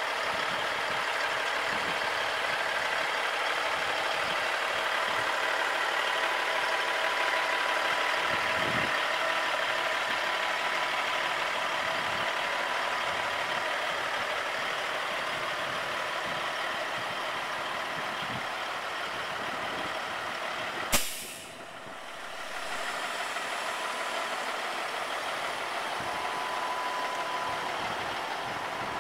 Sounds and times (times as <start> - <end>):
Idling: 0.0 - 29.0
Truck: 0.0 - 29.0.